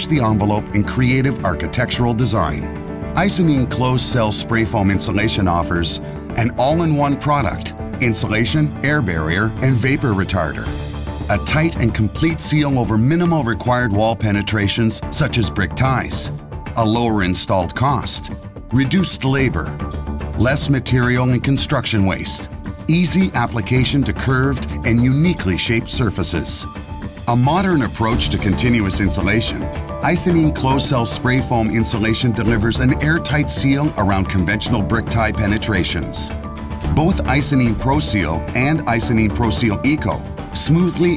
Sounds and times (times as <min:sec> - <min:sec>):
Speech: 0:00.0 - 0:10.7, 0:11.3 - 0:19.8, 0:20.4 - 0:36.3, 0:36.9 - 0:41.1
Music: 0:00.0 - 0:41.1.